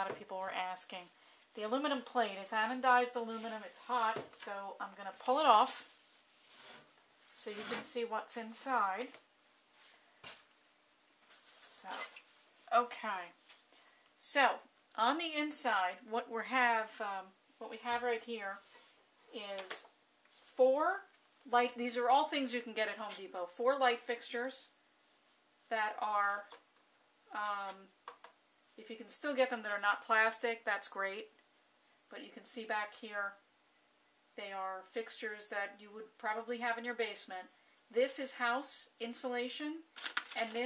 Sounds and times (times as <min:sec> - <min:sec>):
Speech: 0:00.0 - 0:05.9, 0:07.4 - 0:09.2, 0:12.7 - 0:13.4, 0:14.2 - 0:18.6, 0:19.3 - 0:19.9, 0:20.6 - 0:24.8, 0:25.7 - 0:26.6, 0:27.3 - 0:27.9, 0:28.8 - 0:31.3, 0:32.1 - 0:33.4, 0:34.4 - 0:40.6.